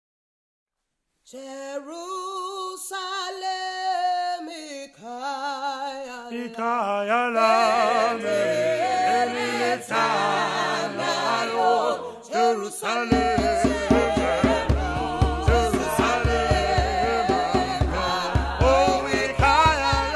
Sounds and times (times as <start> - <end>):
Female singing: 1.3 - 6.5, 9.1 - 20.1
Male singing: 1.3 - 8.9, 12.2 - 20.1
Choir: 5.8 - 20.1.